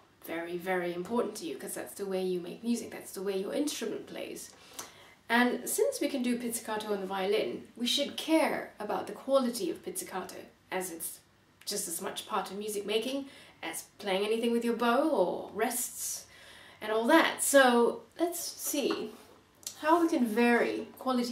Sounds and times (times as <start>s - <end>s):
Speech: 0.2s - 4.5s, 5.3s - 21.3s.